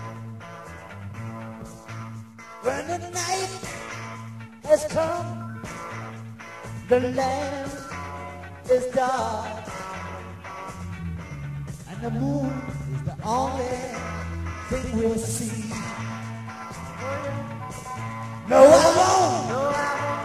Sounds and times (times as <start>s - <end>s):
Music: 0.0s - 20.2s.